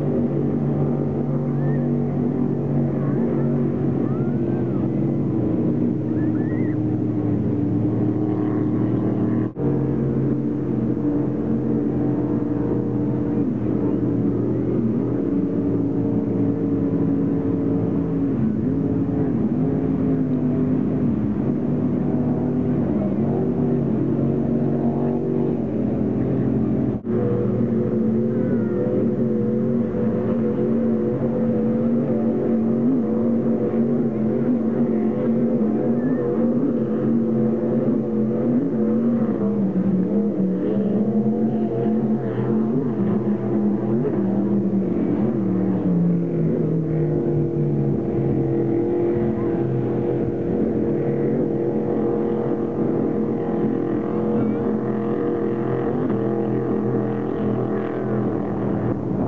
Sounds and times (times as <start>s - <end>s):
Motorboat, speedboat: 0.0s - 59.2s.